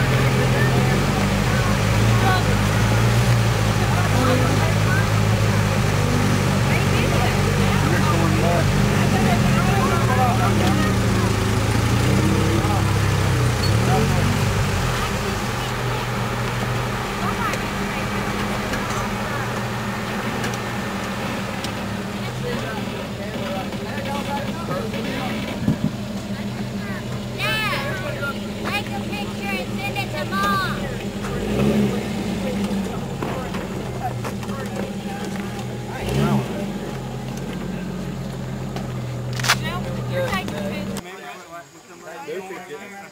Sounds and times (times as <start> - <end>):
Speech: 0.0 - 5.8, 6.5 - 16.2, 17.2 - 19.5, 22.2 - 38.0, 39.5 - 43.1
Truck: 0.0 - 41.9.